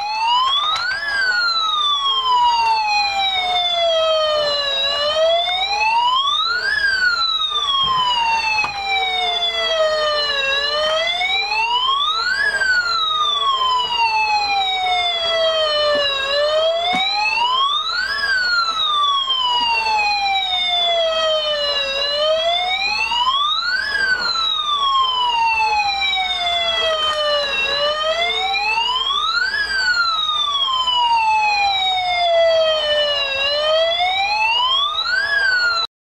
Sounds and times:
Police car (siren): 0:00.0 - 0:35.9.

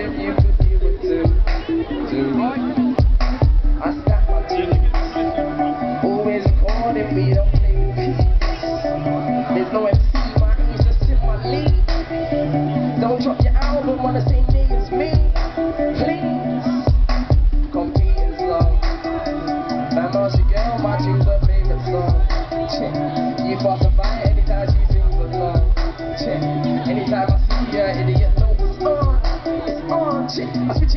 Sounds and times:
Music: 0:00.0 - 0:30.9.

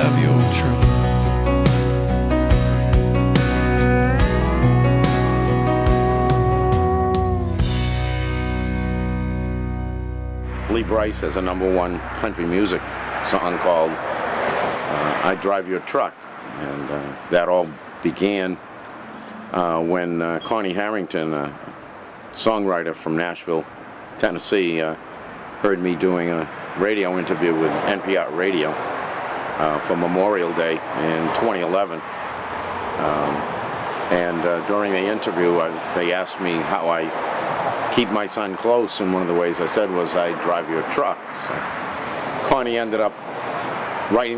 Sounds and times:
Speech: 0:00.0 - 0:00.9, 0:10.7 - 0:14.0, 0:14.9 - 0:18.6, 0:19.6 - 0:21.6, 0:22.4 - 0:25.0, 0:25.6 - 0:28.8, 0:29.6 - 0:32.0, 0:33.0 - 0:33.4, 0:34.1 - 0:37.1, 0:37.9 - 0:41.6, 0:42.4 - 0:43.2, 0:44.1 - 0:44.3.

